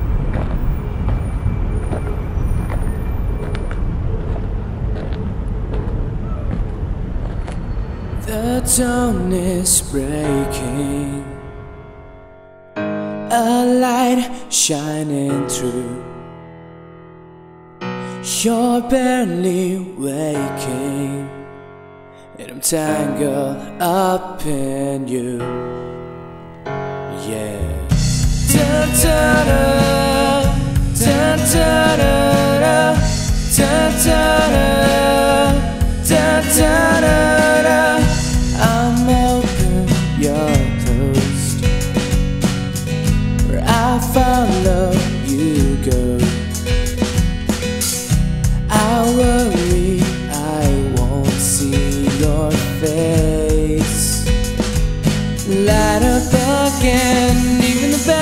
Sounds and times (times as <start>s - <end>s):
Soul music: 8.2s - 16.3s, 22.4s - 58.2s.